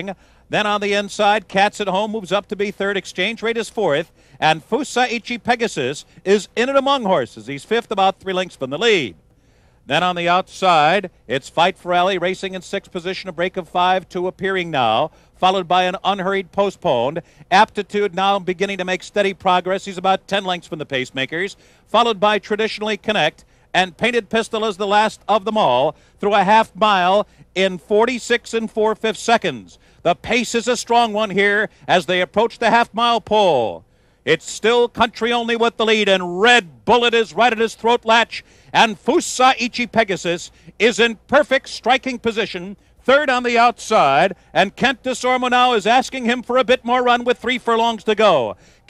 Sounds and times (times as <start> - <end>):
Speech: 0.0 - 9.2, 9.9 - 48.8.